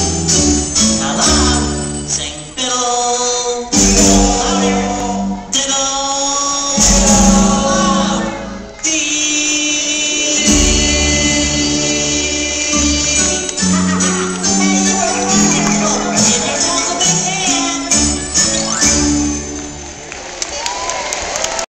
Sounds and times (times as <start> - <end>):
Musical instrument: 0.0 - 20.4.